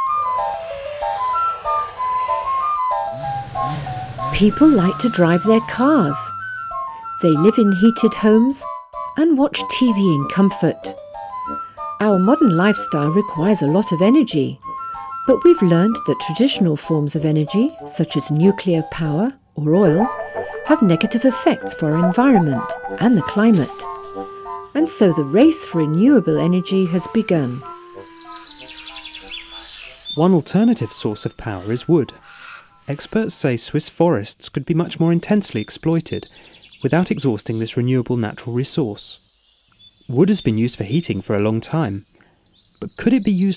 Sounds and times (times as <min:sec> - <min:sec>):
Music: 0:00.0 - 0:32.9
Speech: 0:04.4 - 0:06.3, 0:07.2 - 0:08.6, 0:09.2 - 0:10.9, 0:12.0 - 0:14.6, 0:15.3 - 0:20.1, 0:20.7 - 0:23.8, 0:24.8 - 0:27.6, 0:30.2 - 0:32.1, 0:32.9 - 0:39.2, 0:40.1 - 0:42.0, 0:42.8 - 0:43.5.